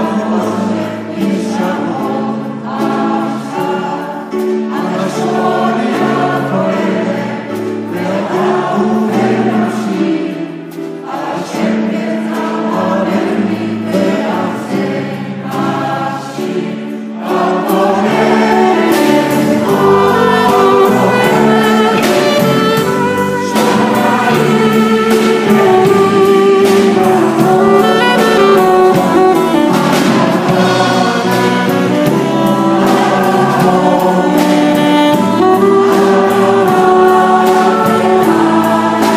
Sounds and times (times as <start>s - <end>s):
Choir: 0.0s - 39.1s
Gospel music: 0.0s - 39.1s.